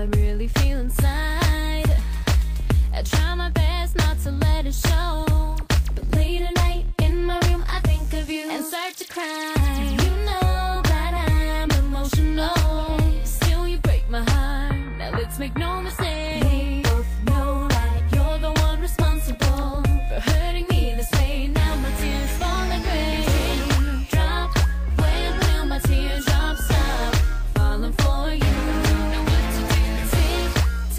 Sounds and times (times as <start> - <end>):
Music: 0.0 - 30.9.